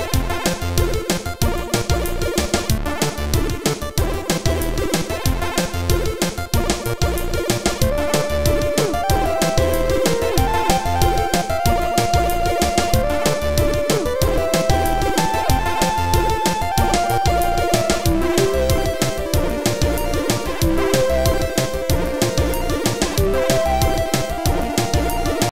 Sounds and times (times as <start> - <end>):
Music: 0.0 - 25.5.